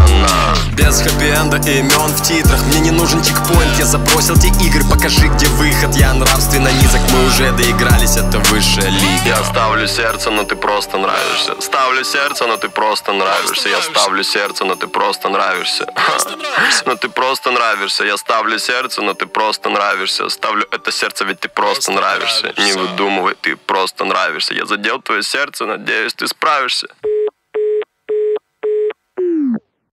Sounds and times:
Music: 0.0 - 24.9
Speech: 8.5 - 27.0.

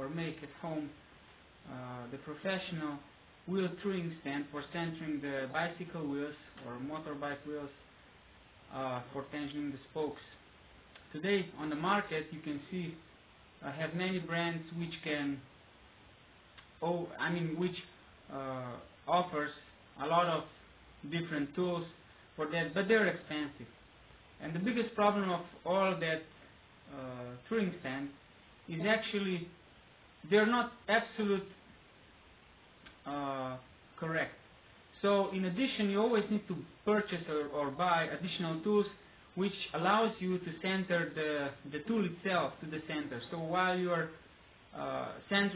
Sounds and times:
Speech: 0.0 - 1.0, 1.6 - 7.8, 8.7 - 10.4, 11.0 - 15.5, 16.7 - 23.7, 24.4 - 29.6, 30.2 - 31.6, 32.9 - 45.5.

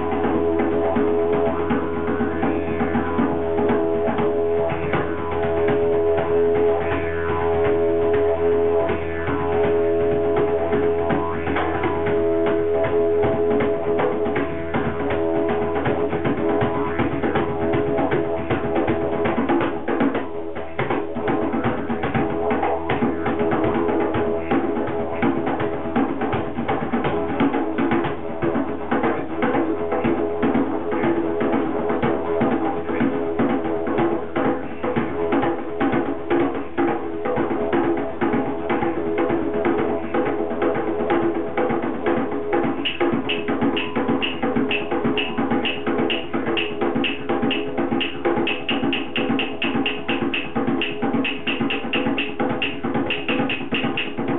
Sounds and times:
Didgeridoo: 0.0 - 54.3.

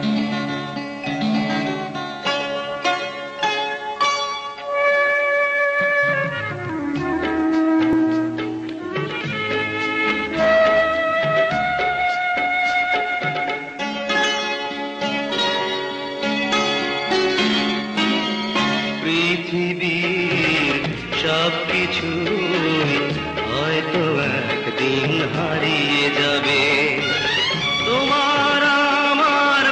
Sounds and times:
Music: 0.0 - 29.7.

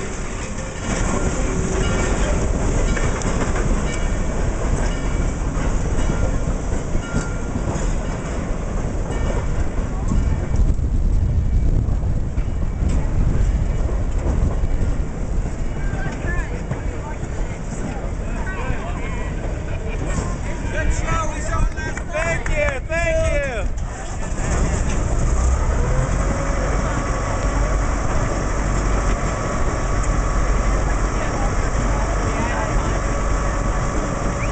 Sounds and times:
Outside, urban or manmade: 0.0 - 34.5
Train: 0.0 - 34.5
Speech: 15.8 - 24.2.

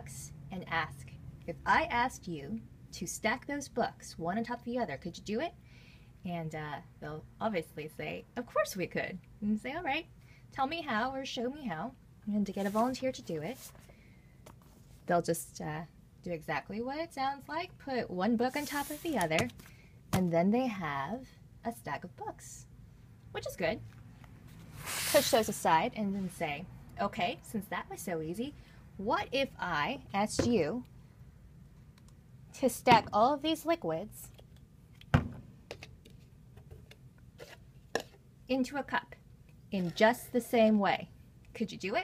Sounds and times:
Speech: 0.0 - 5.6, 6.2 - 13.6, 15.1 - 19.5, 20.2 - 22.7, 23.4 - 23.8, 25.1 - 30.9, 32.6 - 34.4, 38.5 - 42.0.

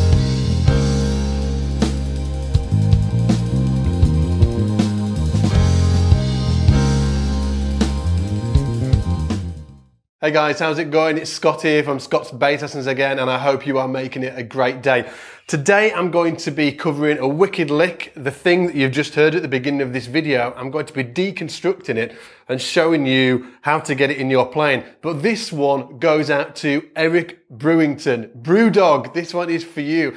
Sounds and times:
Speech: 10.2 - 30.1.

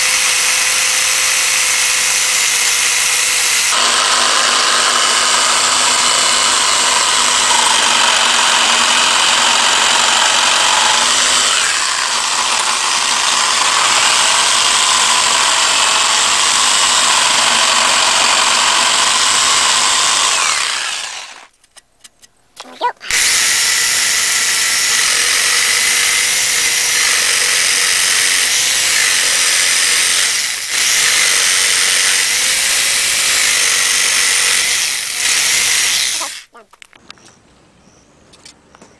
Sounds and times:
Power tool: 0.0 - 21.5, 23.0 - 36.6.

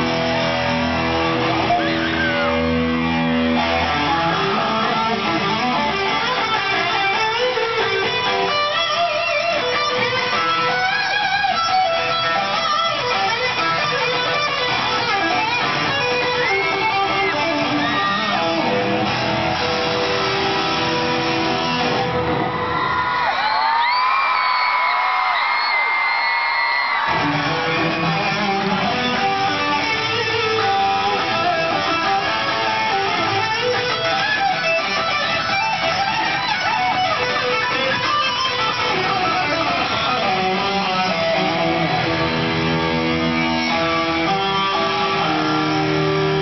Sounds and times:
Bass guitar: 0.0 - 22.8, 27.1 - 46.4
Electric guitar: 0.0 - 23.5, 26.8 - 46.4.

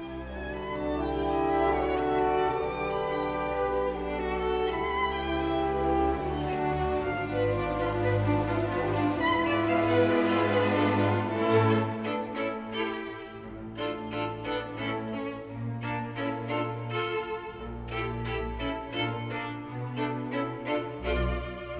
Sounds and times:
Violin, fiddle: 0.0 - 21.7.

